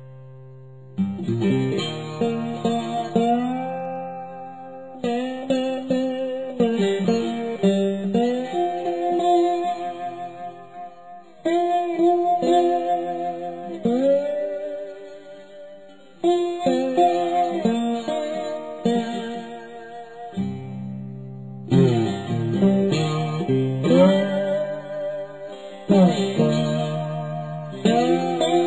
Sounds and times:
Strum: 0.0s - 28.6s.

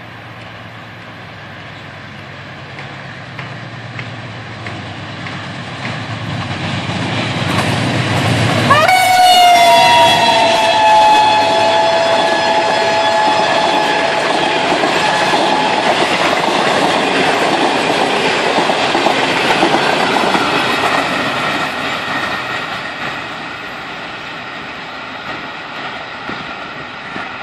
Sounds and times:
Train: 0.0s - 27.4s.

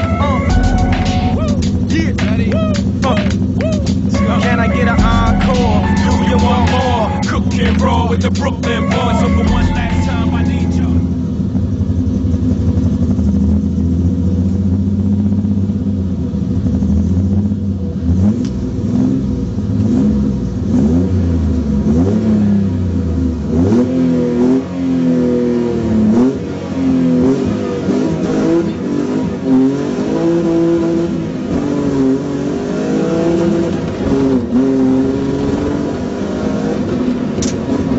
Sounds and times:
Music: 0.0s - 11.2s.

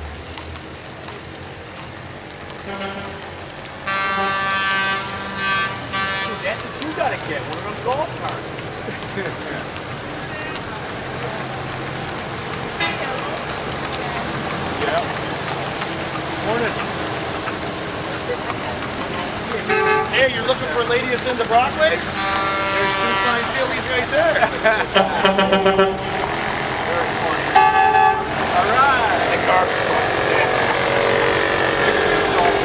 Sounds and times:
Car: 0.0s - 32.6s
Truck: 0.0s - 32.6s.

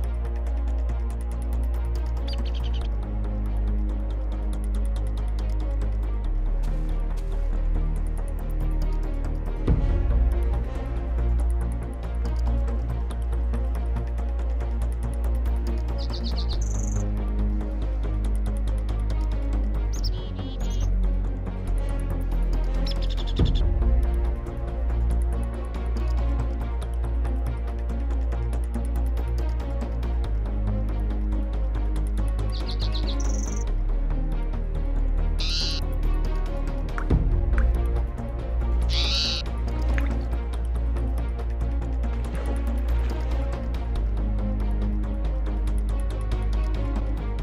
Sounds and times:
Music: 0.0s - 47.4s.

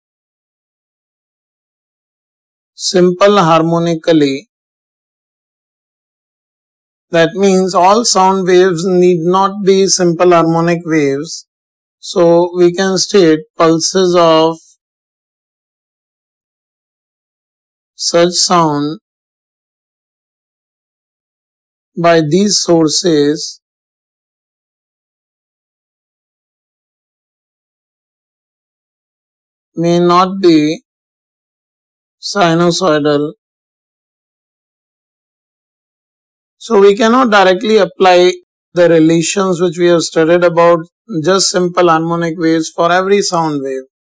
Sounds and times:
Speech: 2.8s - 4.5s, 7.2s - 11.4s, 12.0s - 14.8s, 18.0s - 19.0s, 22.0s - 23.6s, 29.8s - 30.8s, 32.2s - 33.4s, 36.6s - 43.9s.

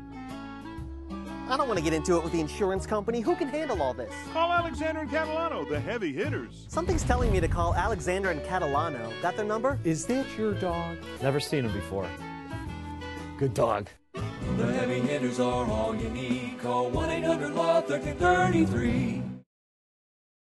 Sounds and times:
Music: 0.0s - 19.4s
Speech: 1.5s - 12.1s, 13.4s - 14.0s.

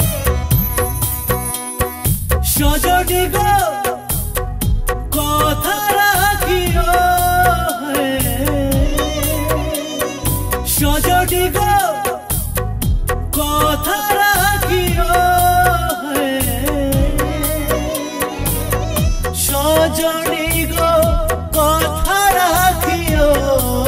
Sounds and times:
Sad music: 0.0s - 23.8s.

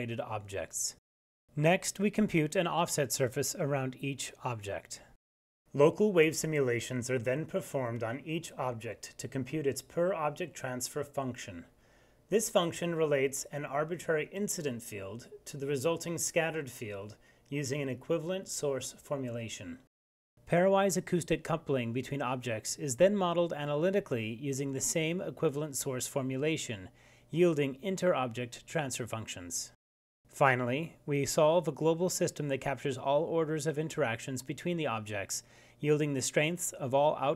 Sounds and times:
Speech: 0.0s - 11.7s, 12.3s - 19.9s, 20.5s - 37.3s.

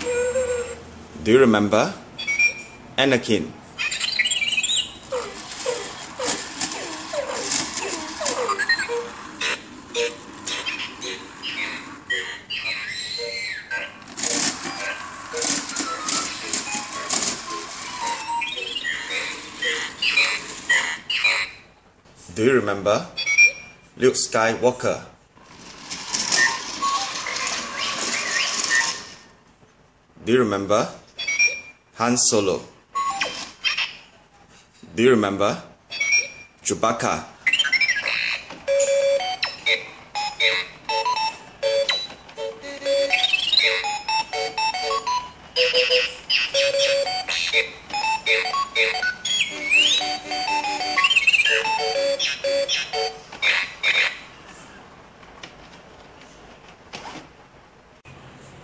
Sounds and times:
Speech: 3.0s - 3.6s, 22.3s - 23.2s, 24.0s - 25.2s, 30.2s - 31.0s, 32.0s - 32.7s, 34.9s - 35.7s, 36.6s - 37.3s.

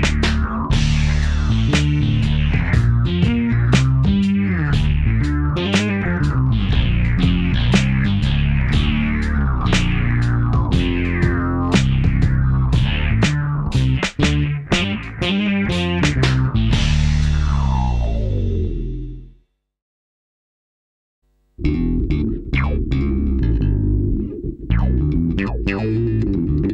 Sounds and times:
Electric guitar: 0.0s - 18.4s, 21.6s - 26.7s
Strum: 0.0s - 19.3s, 21.6s - 26.7s
Bass guitar: 0.0s - 19.4s, 21.6s - 26.7s.

